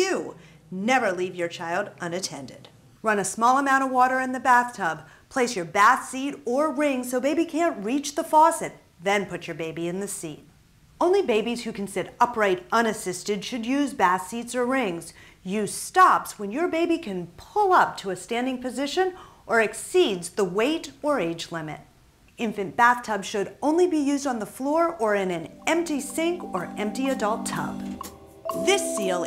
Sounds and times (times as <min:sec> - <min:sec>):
Speech: 0:00.0 - 0:27.8, 0:28.6 - 0:29.2.